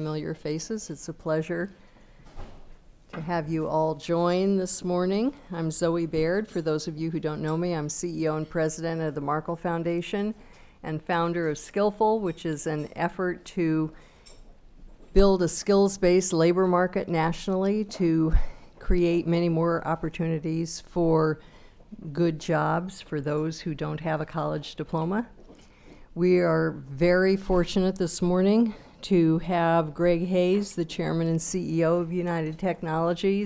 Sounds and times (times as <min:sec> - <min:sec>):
Speech: 0:00.0 - 0:01.8, 0:03.2 - 0:13.9, 0:15.2 - 0:21.4, 0:22.0 - 0:25.4, 0:26.2 - 0:33.4.